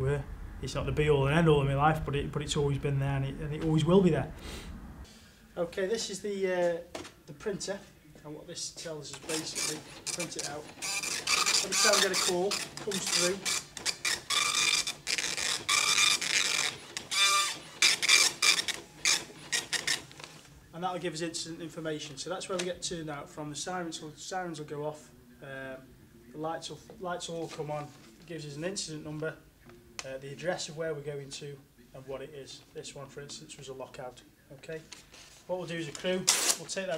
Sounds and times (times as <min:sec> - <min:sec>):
Speech: 0:00.0 - 0:04.3, 0:05.6 - 0:10.7, 0:11.6 - 0:13.4, 0:20.7 - 0:34.9, 0:35.5 - 0:36.9.